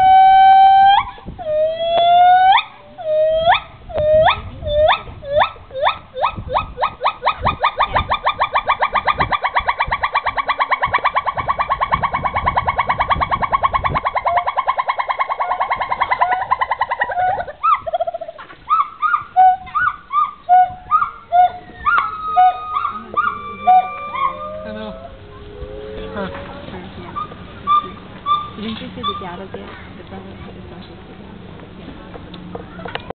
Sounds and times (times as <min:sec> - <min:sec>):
Speech: 0:26.0 - 0:33.1.